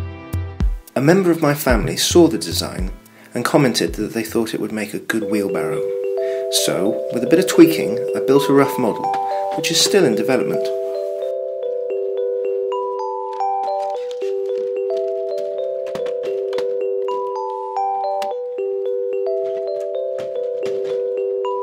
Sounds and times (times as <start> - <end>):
Music: 0.0 - 21.6
Speech: 1.0 - 5.8, 6.5 - 10.8.